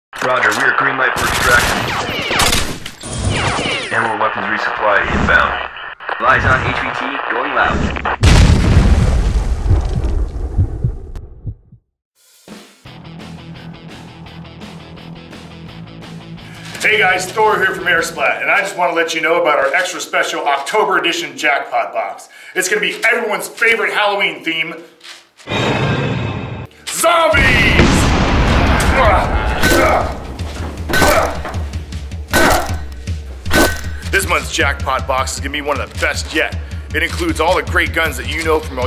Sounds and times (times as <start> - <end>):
Speech: 0.2 - 1.8, 3.9 - 5.6, 6.2 - 7.8, 16.8 - 24.9, 26.9 - 28.0, 34.1 - 38.8.